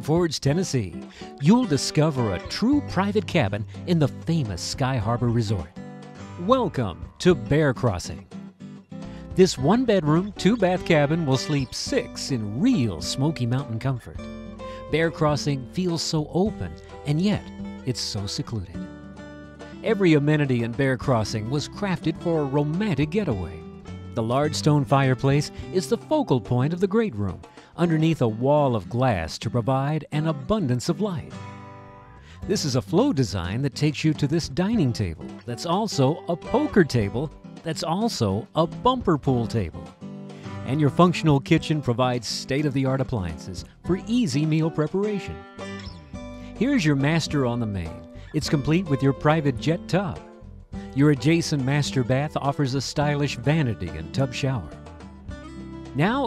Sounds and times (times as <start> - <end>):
Speech: 0.0 - 5.7, 6.4 - 8.3, 9.4 - 14.2, 14.8 - 18.8, 19.8 - 23.6, 24.2 - 31.3, 32.4 - 39.8, 40.6 - 45.4, 46.6 - 50.2, 51.0 - 54.8, 56.0 - 56.2
Music: 0.0 - 56.2.